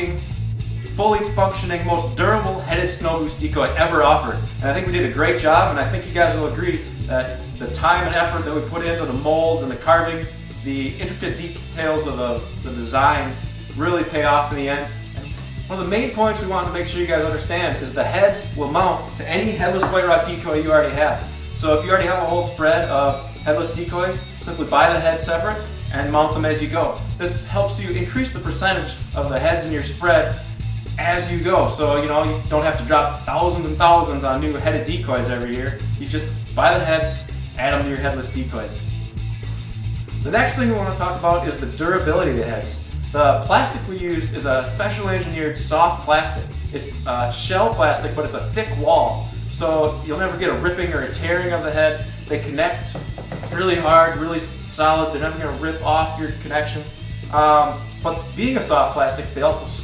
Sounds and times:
Speech: 0.0 - 0.2, 0.9 - 15.0, 15.7 - 30.4, 31.0 - 38.9, 40.2 - 59.8
Music: 0.0 - 59.8.

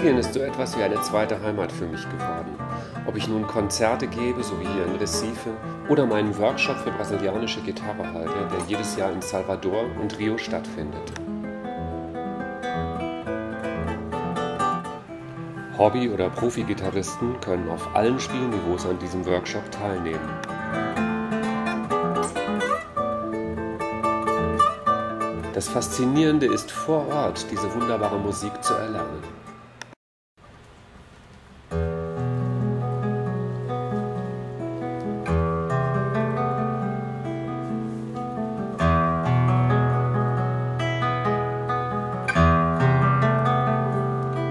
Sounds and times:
Speech: 0.0 - 11.1, 15.8 - 20.3, 25.5 - 29.3
Guitar: 0.0 - 30.0, 31.4 - 44.5.

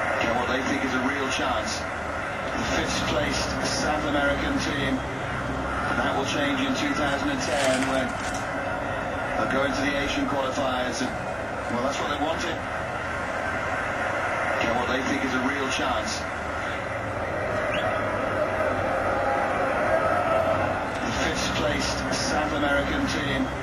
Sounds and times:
Speech: 0.1 - 1.9, 2.5 - 5.1, 5.9 - 8.2, 9.4 - 12.6, 14.6 - 16.3, 21.0 - 23.6.

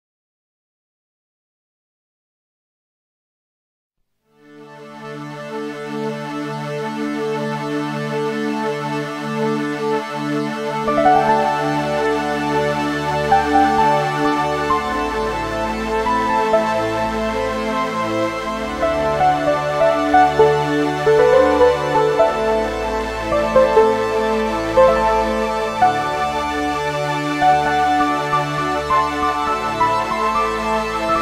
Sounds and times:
Music: 4.2 - 31.2.

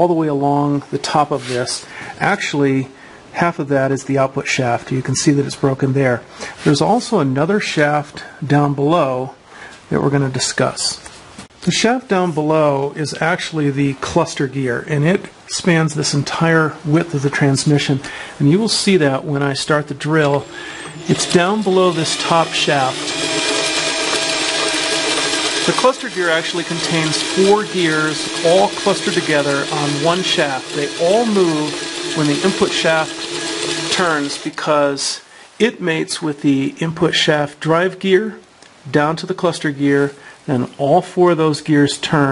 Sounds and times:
Gears: 20.2 - 34.7
Ratchet, pawl: 20.2 - 34.7.

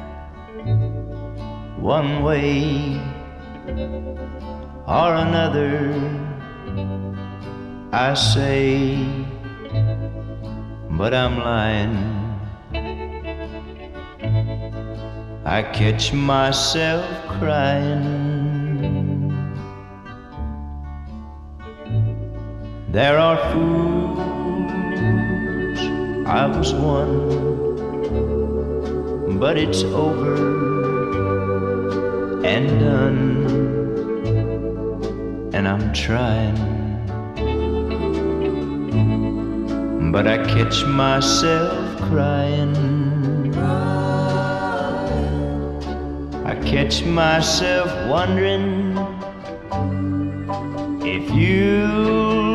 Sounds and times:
Music: 0.0 - 52.5.

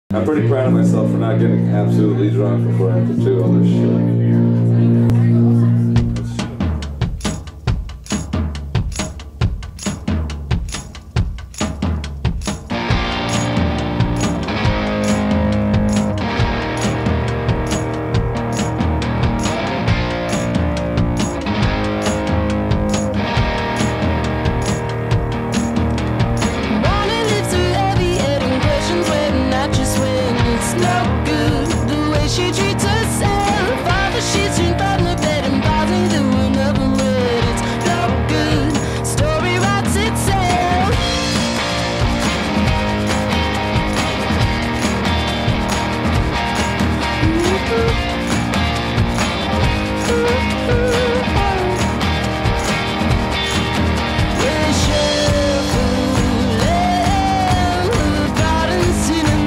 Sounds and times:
Speech: 0.1 - 6.7
Drum kit: 5.1 - 59.4.

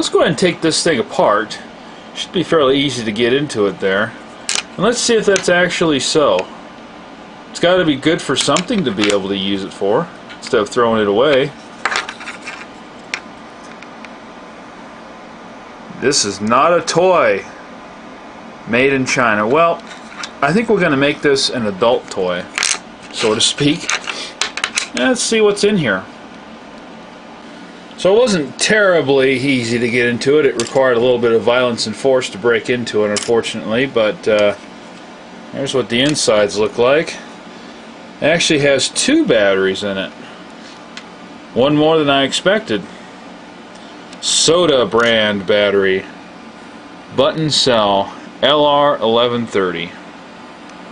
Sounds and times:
Speech: 0.0 - 4.2, 4.8 - 6.5, 7.5 - 11.6, 15.9 - 17.6, 18.6 - 19.8, 20.4 - 22.5, 23.1 - 23.9, 24.9 - 26.1, 28.0 - 34.6, 35.5 - 37.3, 38.2 - 40.2, 41.5 - 42.9, 44.2 - 46.2, 47.1 - 50.0
Inside, small room: 0.0 - 50.9.

